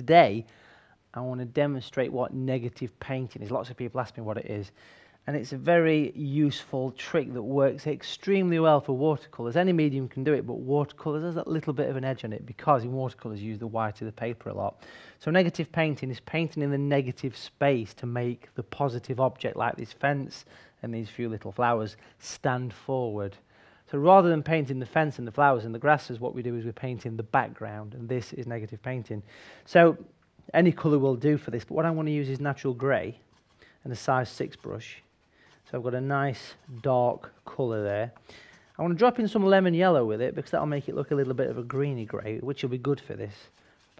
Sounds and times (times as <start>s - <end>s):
Speech: 0.0s - 0.5s, 1.2s - 33.2s, 33.8s - 35.1s, 35.7s - 38.2s, 38.8s - 43.9s.